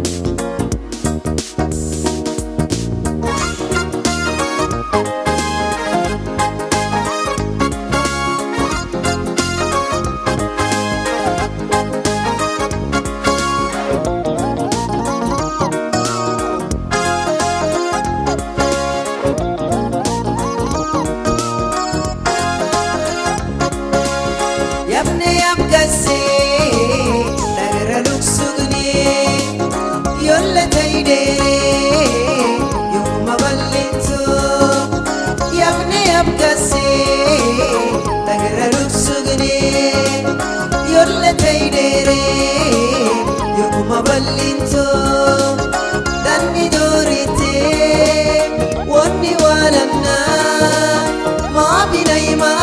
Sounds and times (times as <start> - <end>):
Music: 0.0 - 52.6.